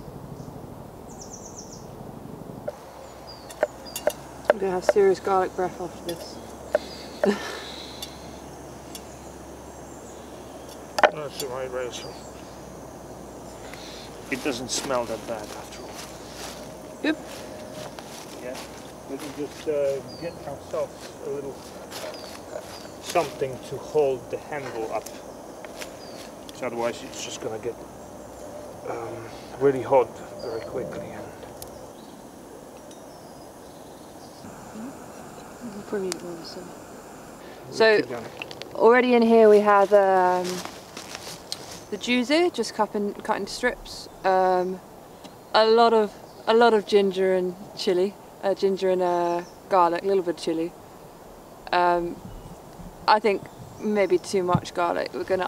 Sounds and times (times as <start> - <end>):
Outside, rural or natural: 0.0 - 55.4.